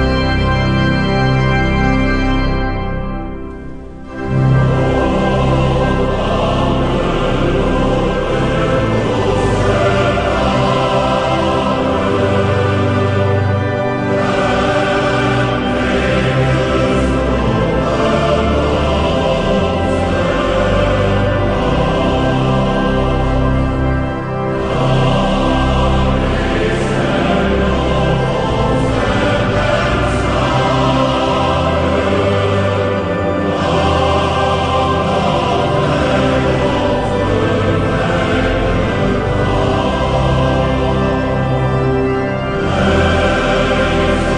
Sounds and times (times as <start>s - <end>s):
Music: 0.0s - 44.3s.